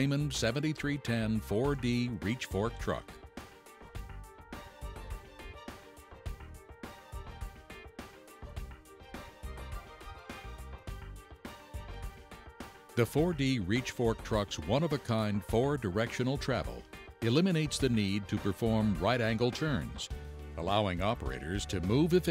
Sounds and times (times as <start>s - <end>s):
Speech: 0.0s - 3.2s, 13.0s - 22.3s
Music: 0.0s - 22.3s.